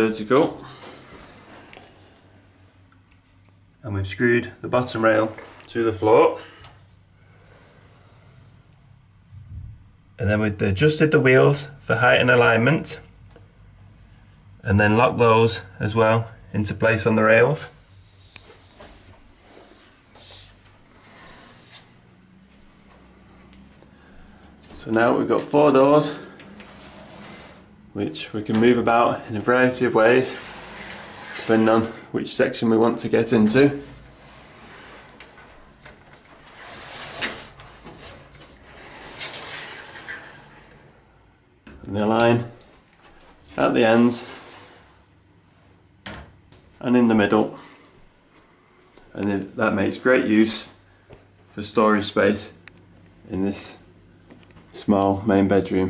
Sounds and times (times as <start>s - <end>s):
Speech: 0.0s - 0.6s, 3.8s - 6.5s, 10.2s - 13.1s, 14.6s - 17.8s, 24.8s - 26.3s, 27.9s - 30.4s, 31.4s - 33.9s, 41.8s - 42.6s, 43.5s - 44.4s, 46.8s - 47.7s, 49.1s - 50.8s, 51.5s - 52.6s, 53.3s - 53.9s, 54.7s - 55.9s
Inside, small room: 0.0s - 55.9s
Sliding door: 20.9s - 22.0s, 24.8s - 27.8s, 28.5s - 32.1s, 33.2s - 41.0s, 44.0s - 45.0s.